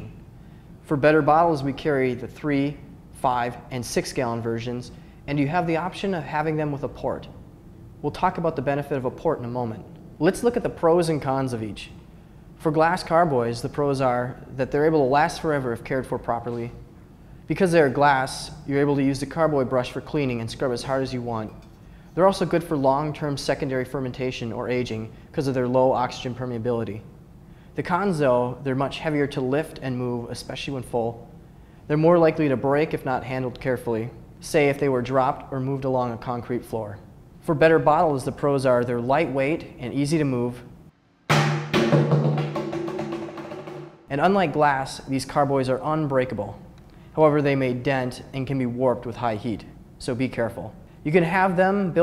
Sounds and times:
Speech: 0:00.0 - 0:00.2, 0:00.8 - 0:07.4, 0:08.0 - 0:12.0, 0:12.6 - 0:16.8, 0:17.5 - 0:21.6, 0:22.2 - 0:27.1, 0:27.8 - 0:31.3, 0:31.9 - 0:40.7, 0:44.1 - 0:52.0.

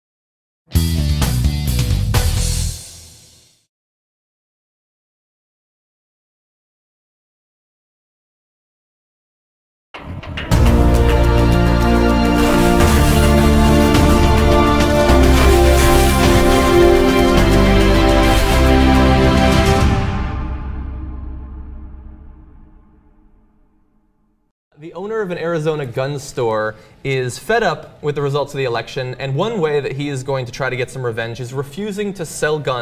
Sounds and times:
Speech: 0:24.8 - 0:32.8.

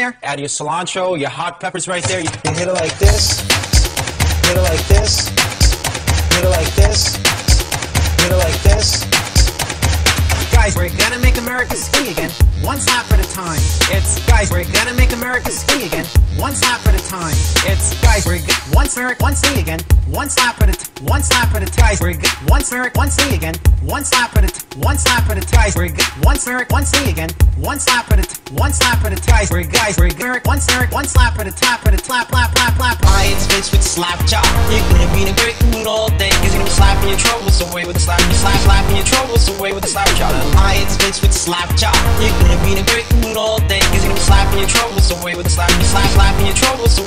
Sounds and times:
Hip hop music: 0:01.0 - 0:47.0.

